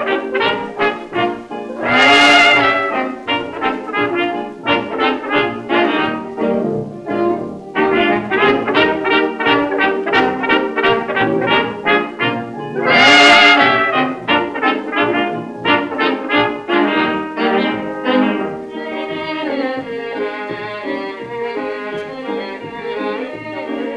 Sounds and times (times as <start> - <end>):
Brass instrument: 0.0 - 23.9.